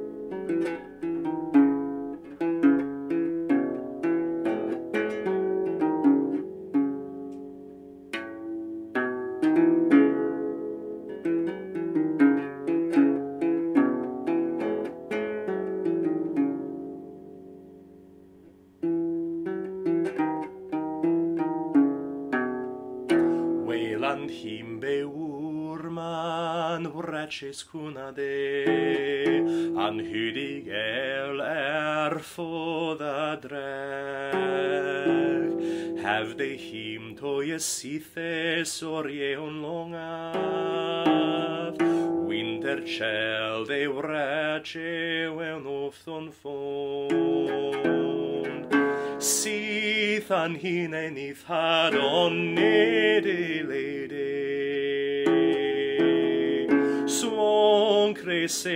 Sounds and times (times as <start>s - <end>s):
Bowed string instrument: 0.0s - 58.7s
Plucked string instrument: 0.0s - 58.7s.